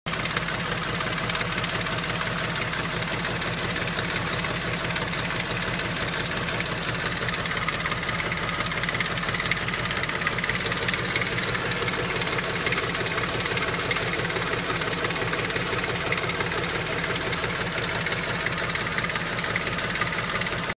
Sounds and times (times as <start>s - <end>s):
Car: 0.1s - 20.7s
Idling: 0.1s - 20.7s
Medium engine (mid frequency): 0.1s - 20.7s.